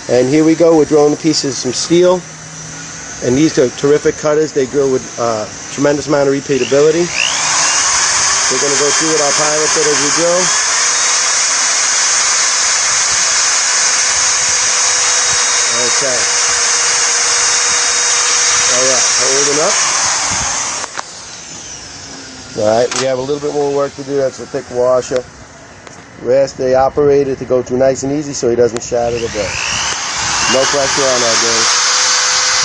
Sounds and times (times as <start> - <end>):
Speech: 0.1 - 2.2, 3.2 - 7.1, 8.5 - 10.5, 15.7 - 16.3, 18.7 - 19.8, 22.6 - 25.3, 26.2 - 29.6, 30.5 - 31.7.